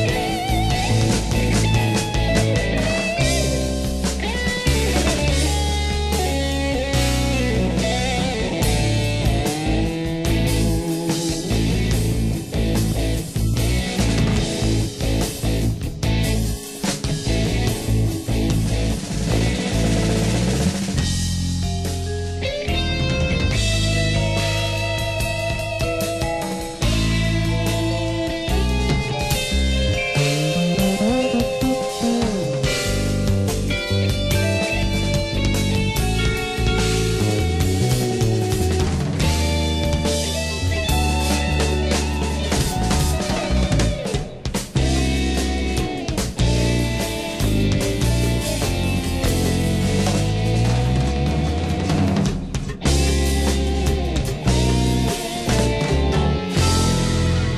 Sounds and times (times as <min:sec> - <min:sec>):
Steel guitar, slide guitar: 0:00.0 - 0:57.5.